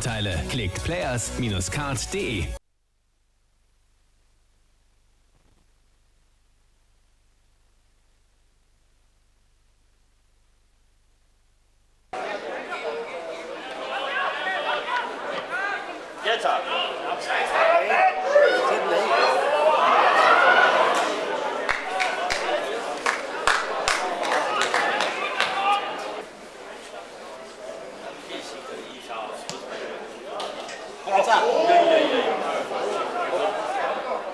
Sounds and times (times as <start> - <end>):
Speech: 0.0 - 2.6, 12.2 - 34.3.